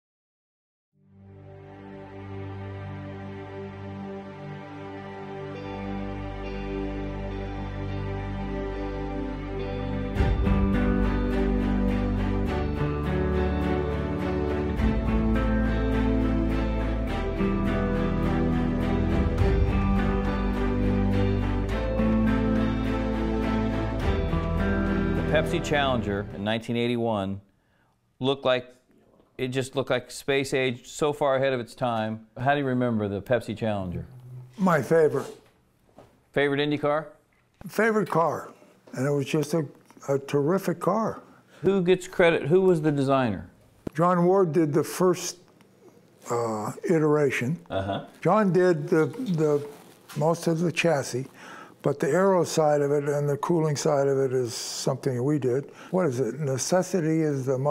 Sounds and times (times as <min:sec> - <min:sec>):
Music: 0:01.0 - 0:26.7, 0:52.0 - 0:54.4
Speech: 0:25.3 - 0:27.4, 0:28.2 - 0:28.8, 0:29.4 - 0:35.4, 0:36.4 - 0:45.4, 0:46.2 - 0:57.7.